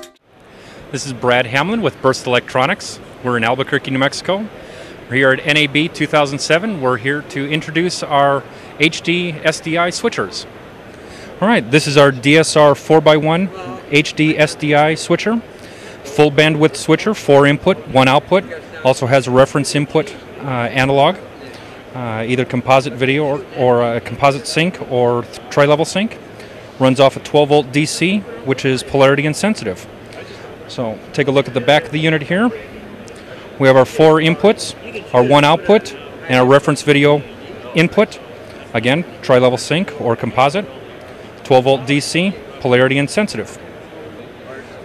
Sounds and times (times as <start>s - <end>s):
Speech: 0.9s - 10.5s, 11.4s - 26.2s, 26.8s - 40.8s, 41.4s - 44.8s.